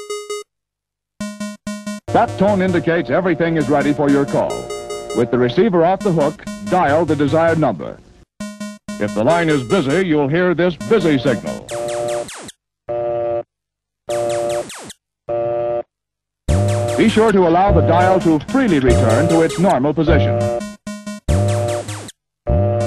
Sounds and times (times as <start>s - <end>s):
Music: 0.0s - 0.4s, 1.2s - 12.2s, 16.5s - 22.8s
Speech: 2.2s - 4.6s, 5.2s - 8.0s, 9.0s - 11.6s, 17.0s - 20.4s.